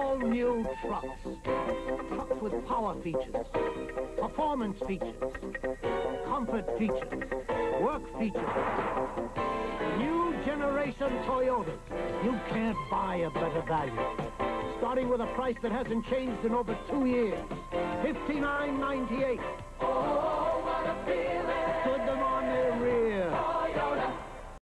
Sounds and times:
Speech: 0:00.0 - 0:01.2, 0:02.2 - 0:03.4, 0:04.2 - 0:05.2, 0:06.3 - 0:07.1, 0:09.9 - 0:14.0, 0:14.8 - 0:17.4, 0:18.0 - 0:19.4, 0:21.9 - 0:23.4
Music: 0:00.0 - 0:24.6.

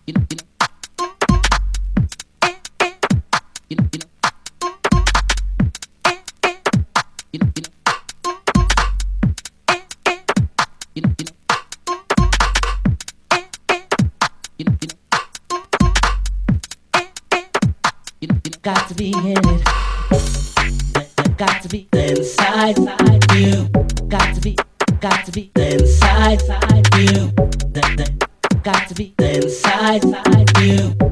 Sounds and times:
Music: 0:00.0 - 0:31.1.

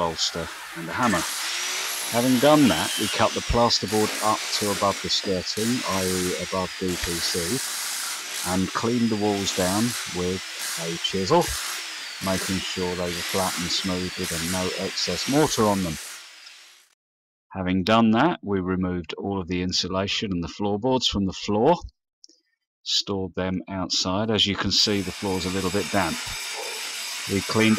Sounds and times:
Speech: 0:00.0 - 0:01.3, 0:02.1 - 0:07.6, 0:08.4 - 0:11.6, 0:12.2 - 0:16.0, 0:17.5 - 0:21.9, 0:22.9 - 0:26.4, 0:27.3 - 0:27.7.

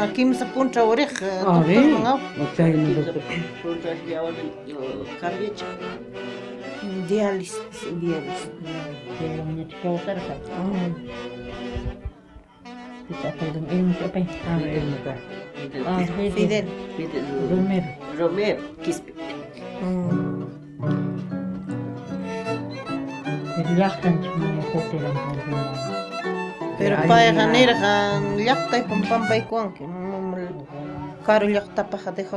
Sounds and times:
Violin, fiddle: 0:00.0 - 0:21.2, 0:21.9 - 0:32.3
Flamenco: 0:00.0 - 0:32.3
String section: 0:00.0 - 0:32.3.

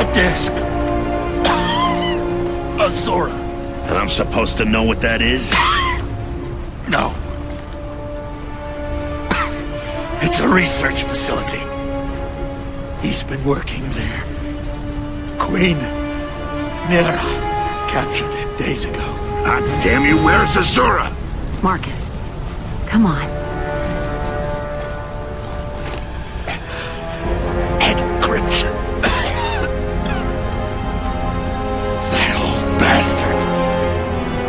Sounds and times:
Music: 0:00.0 - 0:34.4.

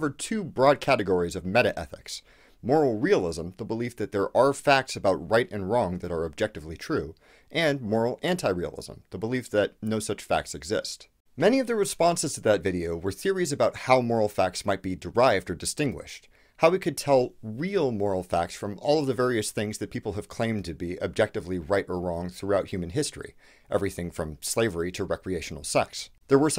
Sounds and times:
Speech: 0:00.0 - 0:26.5.

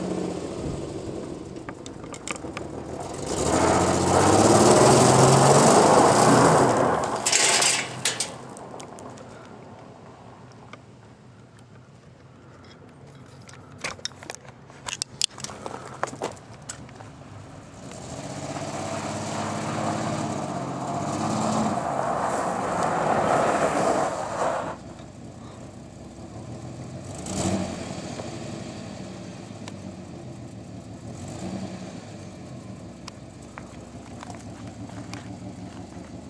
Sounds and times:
Motor vehicle (road): 0:00.0 - 0:36.2.

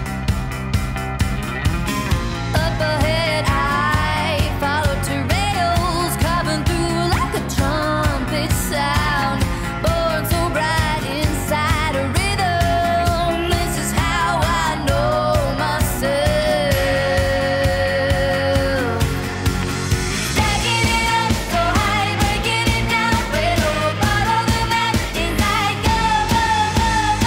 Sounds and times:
Music: 0:00.0 - 0:27.2.

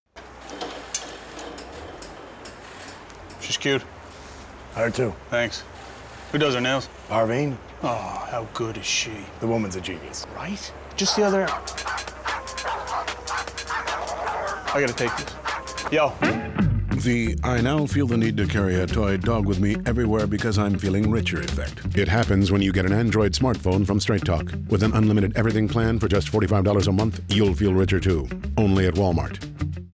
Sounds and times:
Music: 0:11.0 - 0:29.9
Speech: 0:14.7 - 0:15.3, 0:17.0 - 0:29.4.

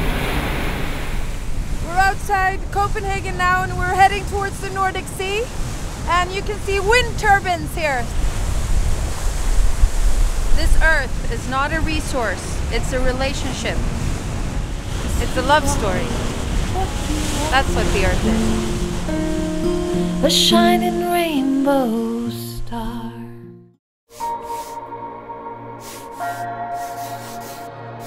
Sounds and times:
Outside, rural or natural: 0:00.0 - 0:22.3, 0:24.1 - 0:28.0
Speech: 0:01.9 - 0:05.5, 0:06.1 - 0:08.1, 0:10.6 - 0:13.8, 0:15.1 - 0:16.2, 0:17.5 - 0:18.3.

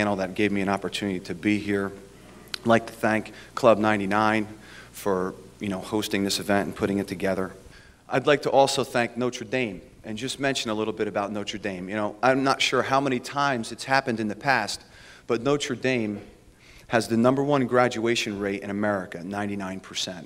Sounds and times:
Male speech, man speaking: 0:00.0 - 0:02.0, 0:02.6 - 0:20.2
Narration, monologue: 0:00.0 - 0:20.2.

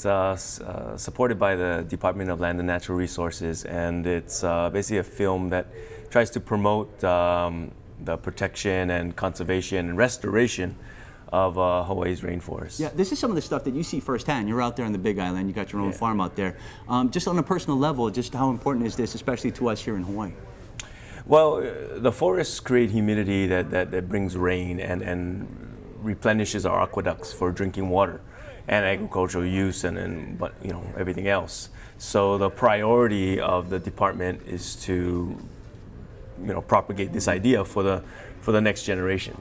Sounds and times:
Speech: 0:00.0 - 0:20.5, 0:21.3 - 0:35.5, 0:36.4 - 0:39.4.

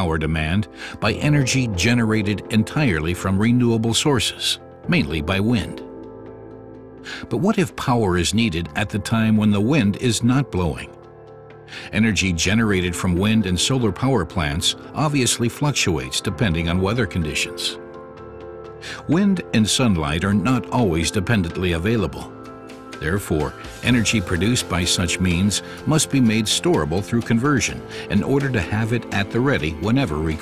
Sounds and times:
Speech: 0:00.0 - 0:05.9, 0:07.1 - 0:11.0, 0:11.7 - 0:17.8, 0:18.8 - 0:22.3, 0:23.0 - 0:30.4
Music: 0:00.0 - 0:30.4.

